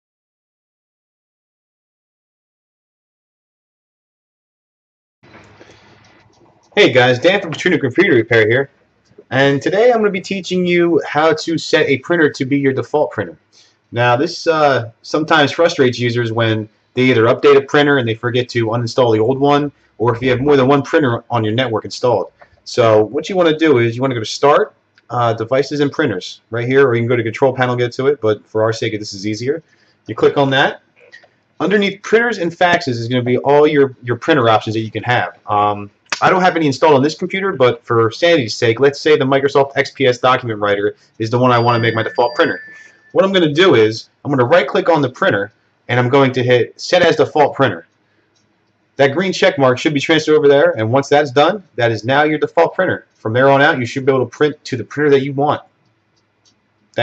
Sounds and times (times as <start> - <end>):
Speech: 6.8 - 13.4, 14.0 - 47.9, 49.0 - 55.7.